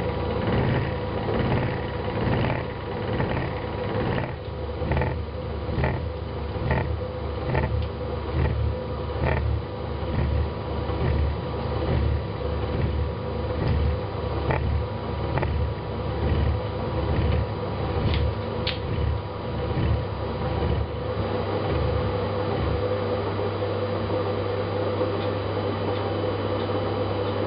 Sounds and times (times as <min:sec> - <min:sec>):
Microwave oven: 0:00.0 - 0:27.4.